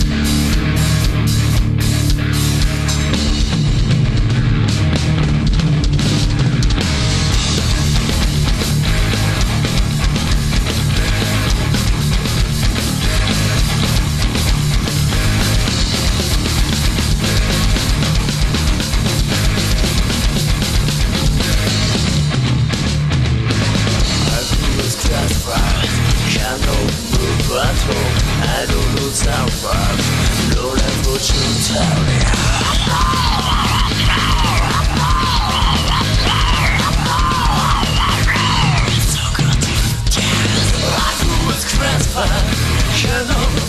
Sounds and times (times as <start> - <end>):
Music: 0.0 - 43.6.